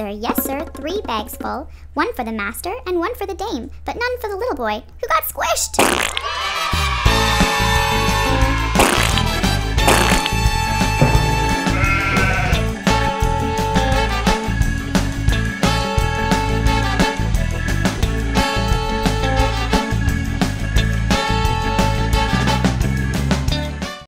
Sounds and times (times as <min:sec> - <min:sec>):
Music: 0:05.8 - 0:24.0.